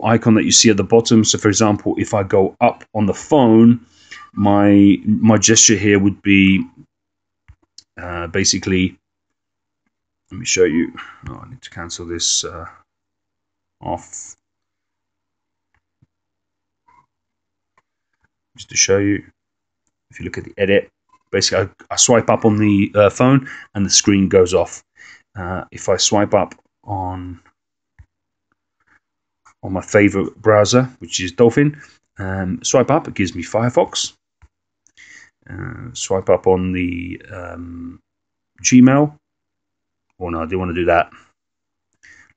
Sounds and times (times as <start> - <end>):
Speech: 0.0 - 6.8, 7.8 - 9.0, 10.3 - 12.9, 13.8 - 14.4, 18.6 - 19.4, 20.1 - 27.4, 29.6 - 34.2, 35.0 - 38.0, 38.6 - 39.2, 40.2 - 41.3.